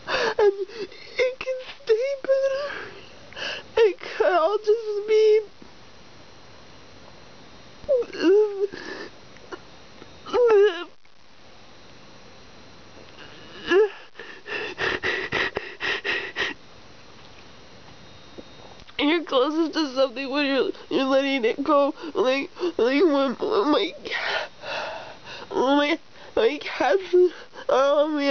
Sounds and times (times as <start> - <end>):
Speech: 1.1 - 2.8, 3.8 - 5.5, 19.0 - 24.1, 25.5 - 28.3.